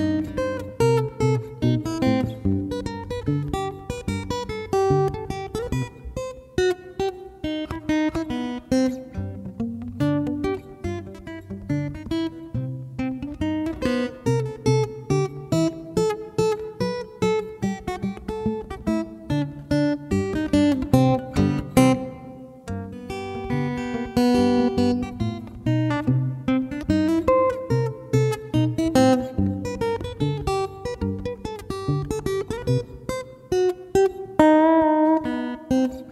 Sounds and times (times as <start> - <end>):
Music: 0.0 - 36.1.